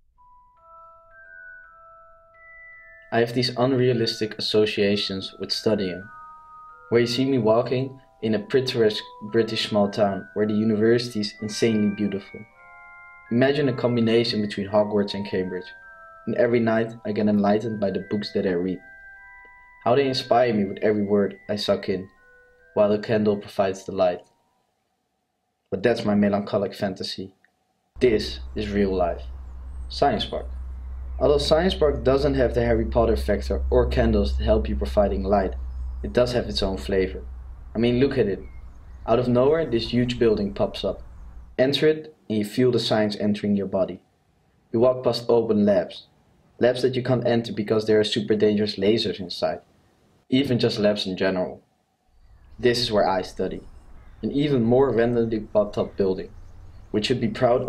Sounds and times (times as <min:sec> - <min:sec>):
Music: 0:00.2 - 0:24.6, 0:28.0 - 0:41.6
Speech: 0:03.2 - 0:06.1, 0:06.9 - 0:12.5, 0:13.3 - 0:15.7, 0:16.3 - 0:18.8, 0:19.9 - 0:22.1, 0:22.8 - 0:24.2, 0:25.8 - 0:27.4, 0:28.0 - 0:29.2, 0:29.9 - 0:30.5, 0:31.2 - 0:37.2, 0:37.8 - 0:38.5, 0:39.1 - 0:41.0, 0:41.6 - 0:44.0, 0:44.8 - 0:49.6, 0:50.3 - 0:51.6, 0:52.6 - 0:53.6, 0:54.2 - 0:56.3, 0:57.0 - 0:57.6.